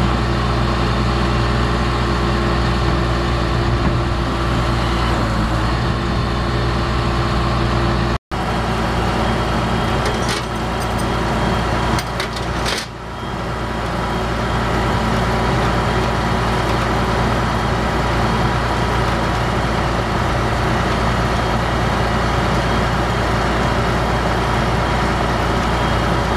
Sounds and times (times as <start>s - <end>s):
Vehicle: 0.0s - 26.3s.